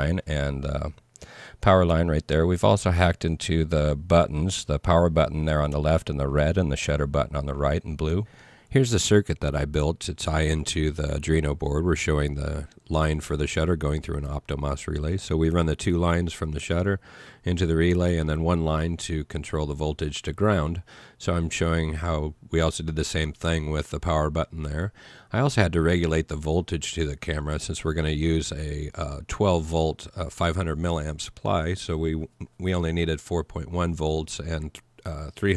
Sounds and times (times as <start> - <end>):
Speech: 0.0 - 1.0, 1.6 - 35.5.